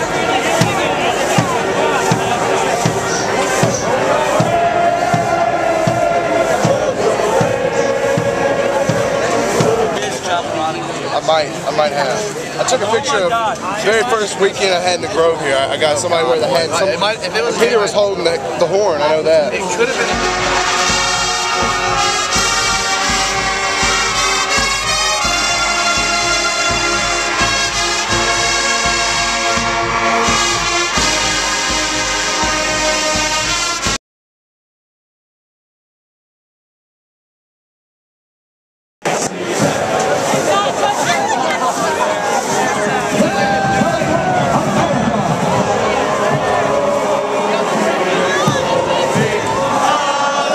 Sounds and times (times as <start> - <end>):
Music: 0.0 - 11.9, 19.2 - 34.0, 39.2 - 50.5.